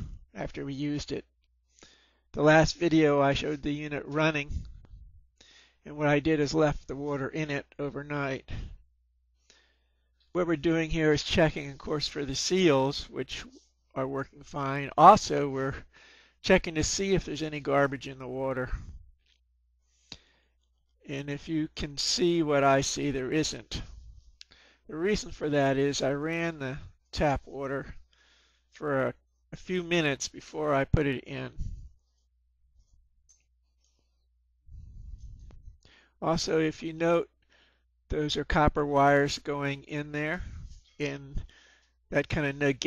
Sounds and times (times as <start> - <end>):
Speech: 0.0 - 1.3, 2.4 - 4.7, 5.9 - 8.8, 10.4 - 18.9, 21.1 - 23.9, 24.9 - 28.0, 28.8 - 31.8, 36.2 - 37.3, 38.1 - 41.5, 42.1 - 42.8.